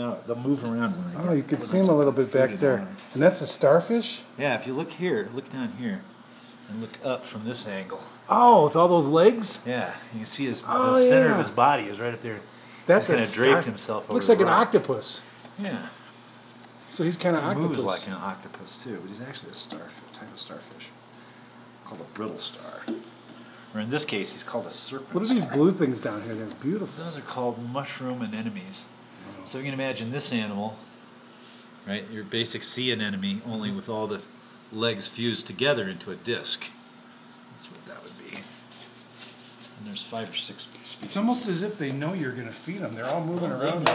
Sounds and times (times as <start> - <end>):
Speech: 0.0 - 6.1, 6.7 - 16.0, 16.9 - 21.0, 23.7 - 30.8, 31.8 - 36.8, 39.8 - 43.9.